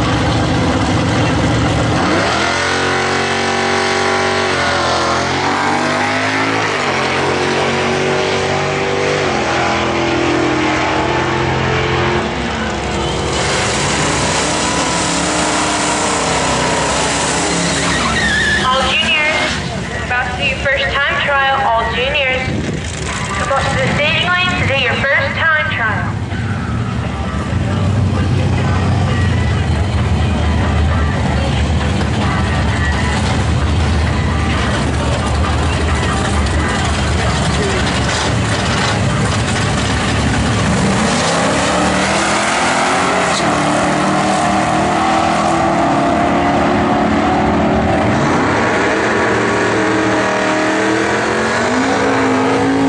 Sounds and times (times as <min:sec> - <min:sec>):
Car: 0:00.0 - 0:52.8
Medium engine (mid frequency): 0:00.0 - 0:52.8.